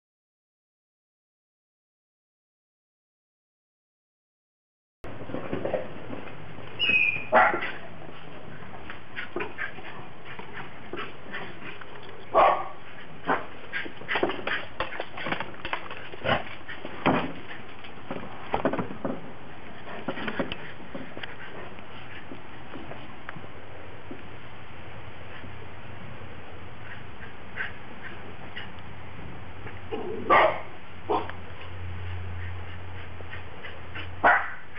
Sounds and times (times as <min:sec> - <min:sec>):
Dog: 0:06.9 - 0:17.7, 0:26.8 - 0:28.8, 0:29.6 - 0:34.7.